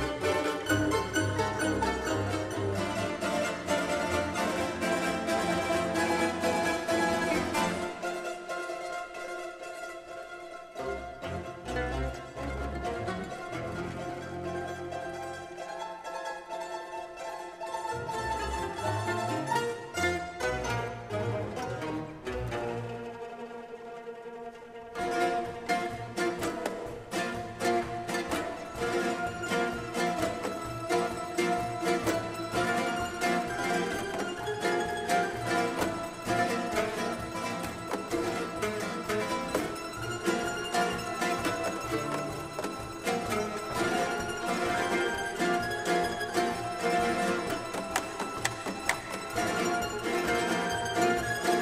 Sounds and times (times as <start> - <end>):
Orchestra: 0.0 - 51.6.